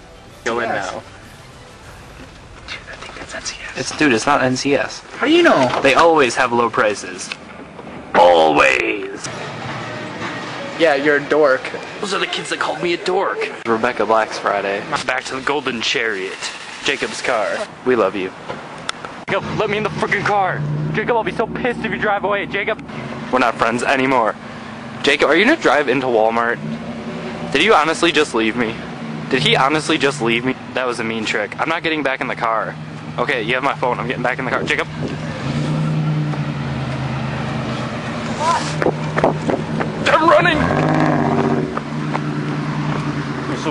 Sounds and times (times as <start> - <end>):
Outside, urban or manmade: 0.0 - 43.7
Speech: 19.3 - 24.4, 27.6 - 34.9, 40.0 - 40.6.